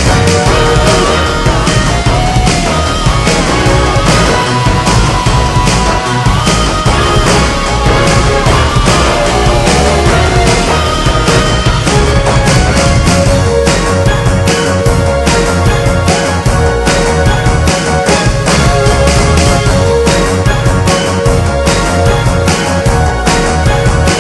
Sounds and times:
Music: 0.0 - 24.2.

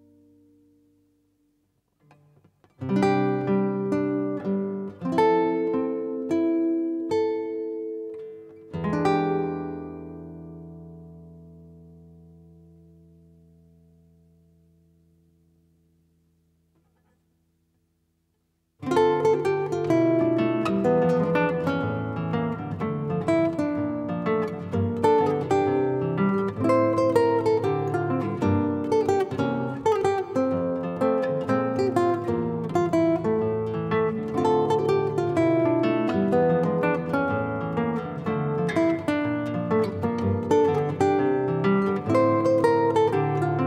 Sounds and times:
Music: 0.0 - 17.9, 18.8 - 43.6.

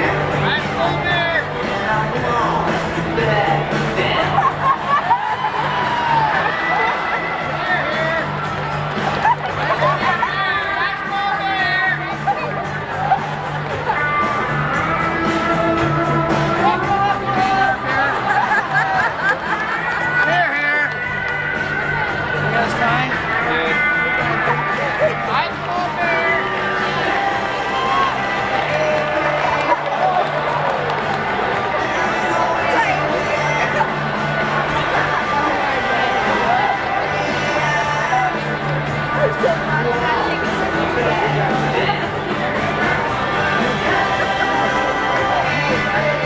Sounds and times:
Music: 0.0 - 46.2.

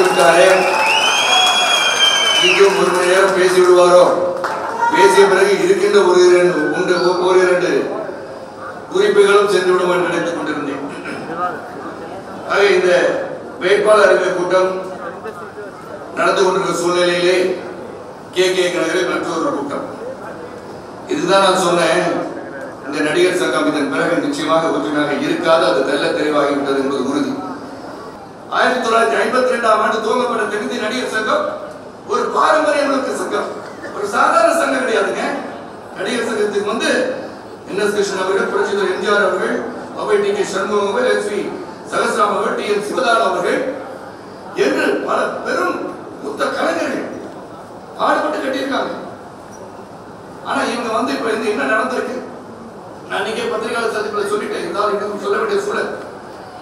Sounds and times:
Male speech, man speaking: 0.0 - 0.8, 2.4 - 4.3, 4.9 - 8.1, 8.9 - 11.6, 12.5 - 17.6, 18.4 - 20.4, 21.1 - 27.5, 28.5 - 43.8, 44.6 - 47.1, 48.0 - 49.1, 50.4 - 52.3, 53.1 - 56.0
Narration, monologue: 2.4 - 11.3, 12.4 - 27.4, 28.4 - 56.1.

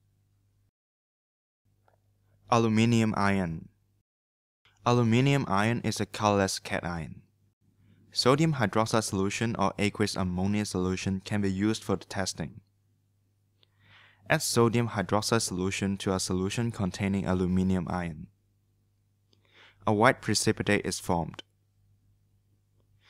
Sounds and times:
Inside, small room: 0.0 - 0.8, 1.7 - 4.1, 4.7 - 23.1
Speech: 2.5 - 3.8, 4.8 - 7.3, 8.2 - 12.7, 14.3 - 18.4, 19.8 - 21.5.

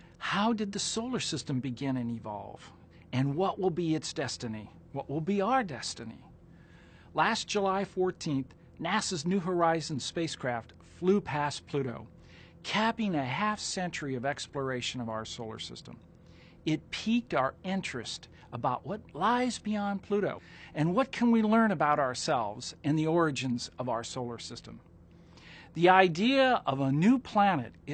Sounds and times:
Speech: 0.2 - 6.3, 7.2 - 16.0, 16.7 - 24.8, 25.7 - 27.9.

